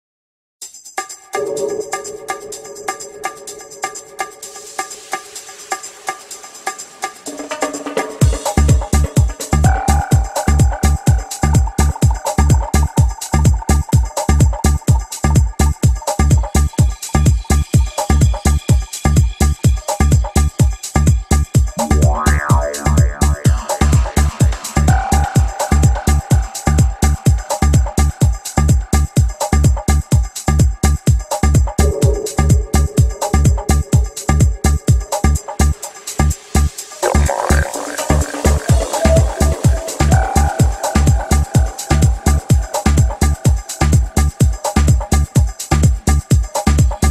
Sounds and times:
Music: 0.6 - 47.1.

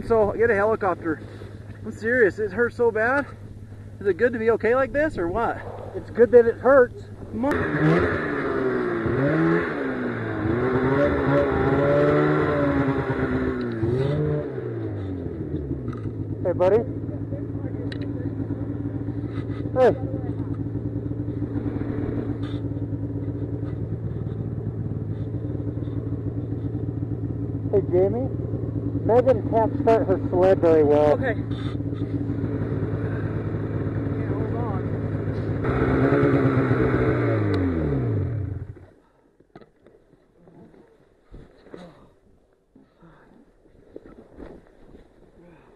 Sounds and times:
Speech: 0.0 - 1.2, 1.8 - 3.3, 4.0 - 7.6, 16.4 - 18.4, 19.8 - 20.5, 27.7 - 28.3, 29.0 - 31.5, 34.2 - 34.9
Vehicle: 0.0 - 45.7.

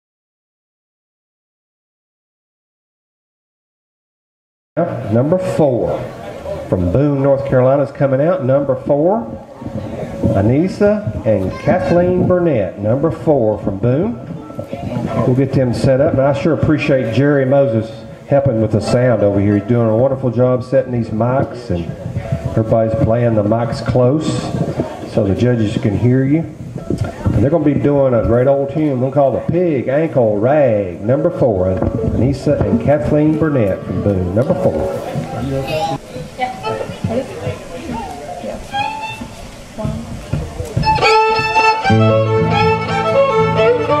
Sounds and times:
Speech: 4.8 - 38.8.

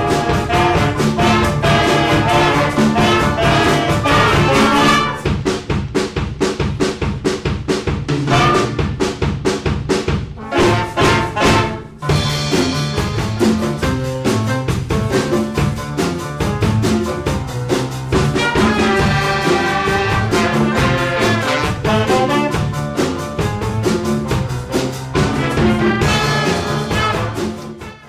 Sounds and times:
Drum: 0.0 - 28.0.

